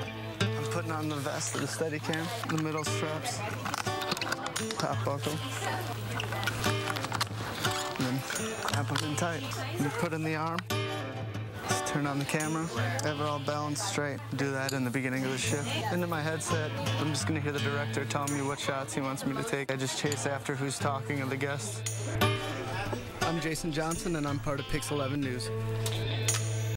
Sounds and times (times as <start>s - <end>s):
Music: 0.0s - 26.7s
Speech: 0.6s - 3.7s, 4.6s - 6.3s, 8.0s - 10.6s, 11.7s - 21.8s, 22.6s - 25.5s.